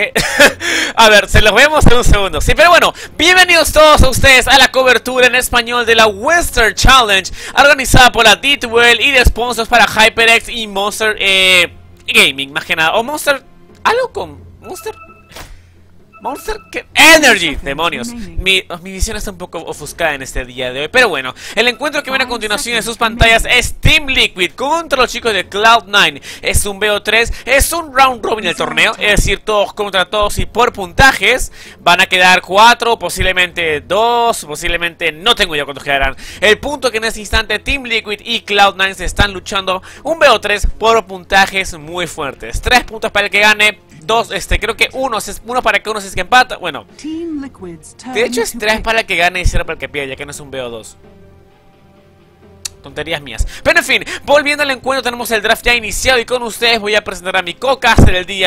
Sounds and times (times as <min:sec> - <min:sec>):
Speech: 0:01.0 - 0:15.0, 0:16.2 - 0:51.0, 0:52.8 - 0:58.4.